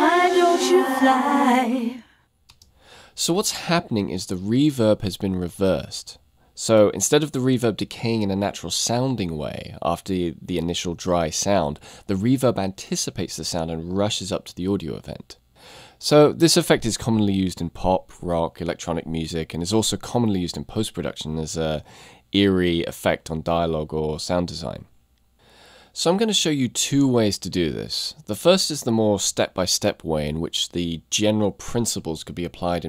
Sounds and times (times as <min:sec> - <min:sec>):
Speech: 0:00.0 - 0:02.0, 0:03.2 - 0:15.4, 0:16.0 - 0:24.9, 0:26.0 - 0:32.8.